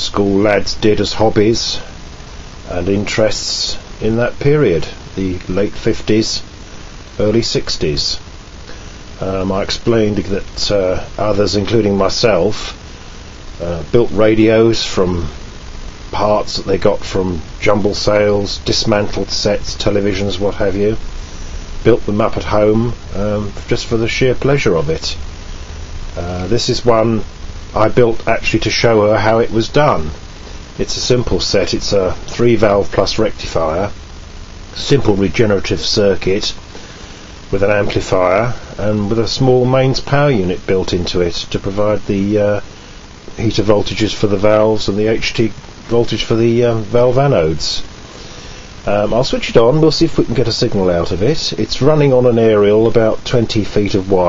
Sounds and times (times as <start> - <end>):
Speech: 0.0 - 2.0, 2.6 - 6.5, 7.2 - 8.3, 9.2 - 12.8, 13.6 - 15.4, 16.1 - 21.0, 21.8 - 25.2, 26.2 - 30.2, 30.8 - 34.0, 34.7 - 36.6, 37.5 - 42.7, 43.3 - 47.9, 48.8 - 54.2.